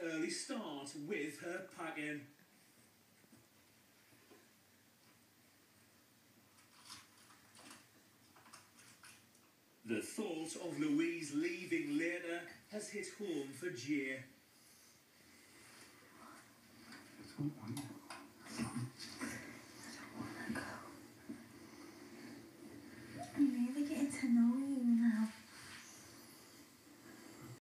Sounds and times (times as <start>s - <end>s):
Speech: 0.0s - 2.4s, 9.9s - 14.4s, 23.3s - 25.4s.